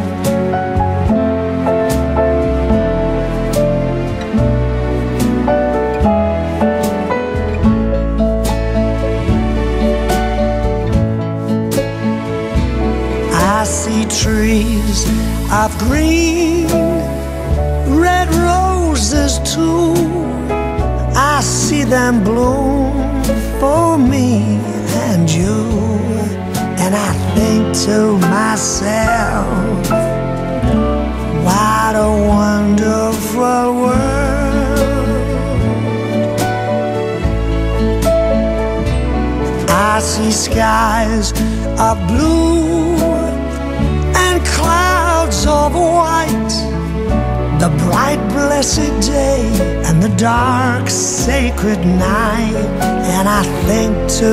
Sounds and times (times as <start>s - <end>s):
New-age music: 0.0s - 54.3s.